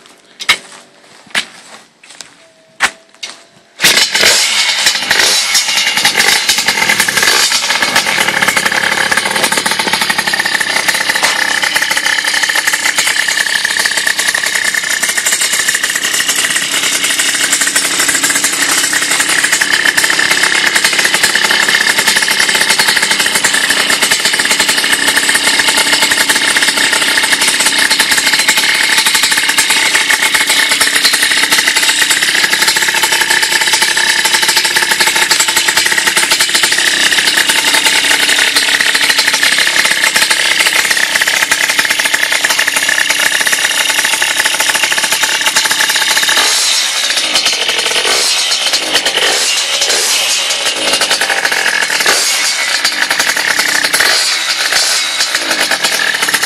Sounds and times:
Idling: 0:03.9 - 0:56.4.

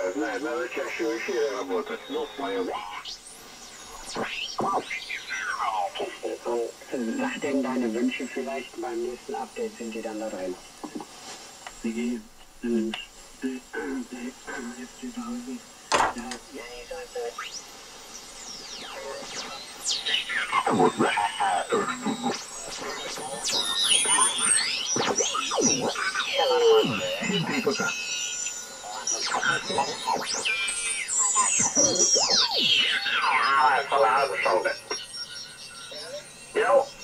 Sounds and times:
Speech: 0:00.0 - 0:03.1, 0:04.6 - 0:10.6, 0:11.8 - 0:17.4, 0:20.1 - 0:28.0, 0:28.9 - 0:30.4, 0:31.3 - 0:34.9, 0:36.0 - 0:37.0
Radio: 0:00.0 - 0:37.0.

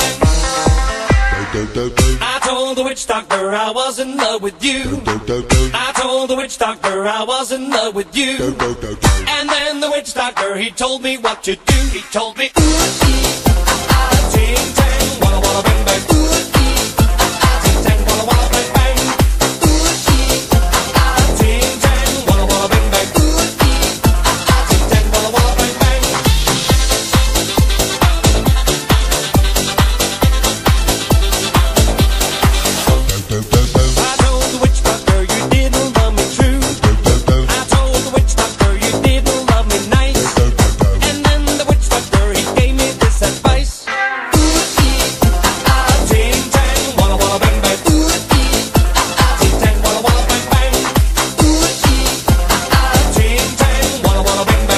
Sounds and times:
Reggae: 0:00.0 - 0:54.7.

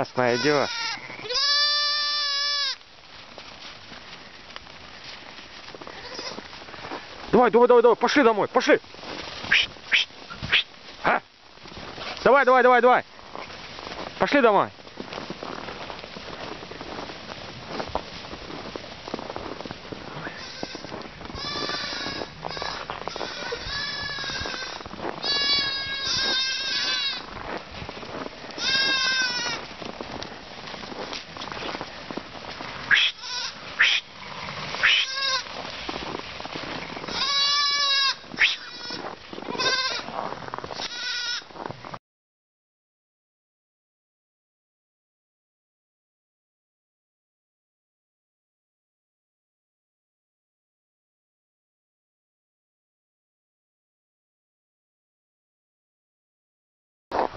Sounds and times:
Sheep: 0:00.0 - 0:41.7.

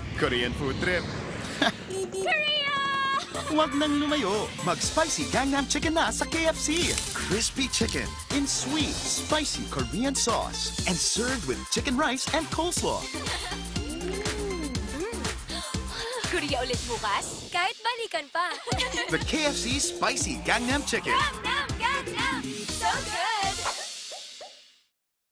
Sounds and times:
Music: 0:03.3 - 0:24.9
Speech: 0:03.4 - 0:13.0, 0:16.2 - 0:21.2.

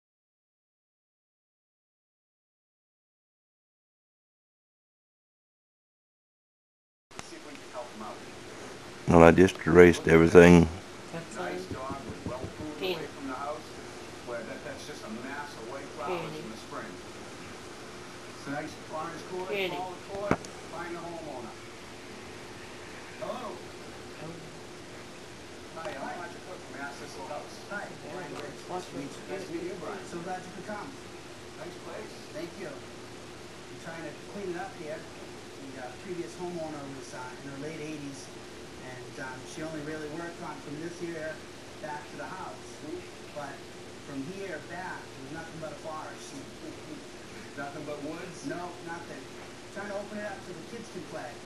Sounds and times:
Speech: 0:07.2 - 0:08.3, 0:09.1 - 0:17.0, 0:18.4 - 0:21.6, 0:25.8 - 0:31.0, 0:31.6 - 0:32.9, 0:33.7 - 0:51.4.

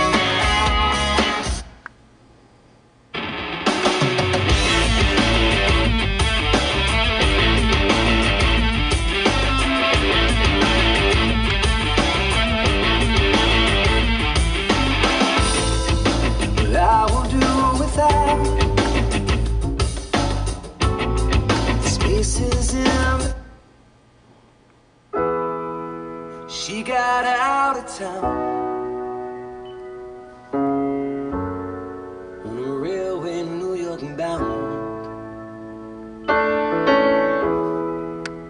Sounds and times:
Keyboard (musical): 0:00.0 - 0:01.8, 0:03.2 - 0:23.6, 0:25.1 - 0:38.5.

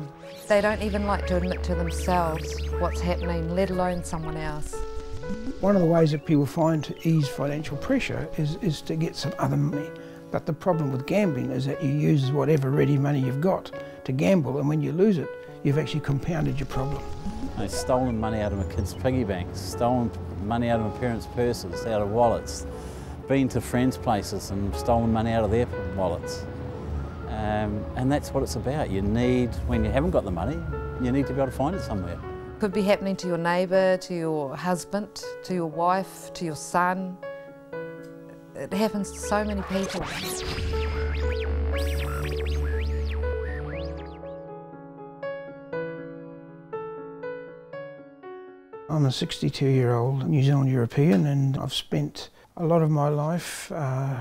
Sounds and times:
Music: 0:00.0 - 0:51.7.

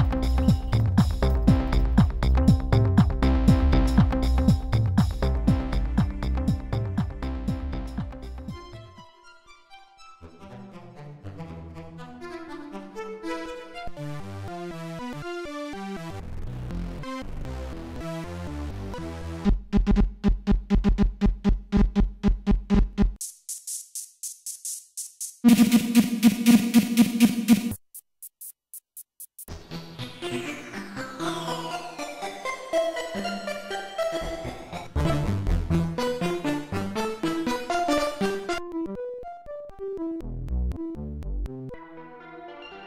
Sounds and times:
Sampler: 0:25.4 - 0:29.6.

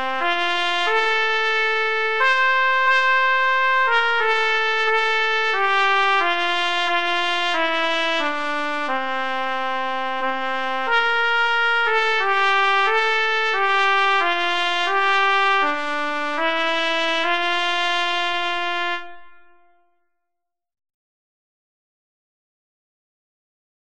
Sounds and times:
Trumpet: 0:00.0 - 0:20.1.

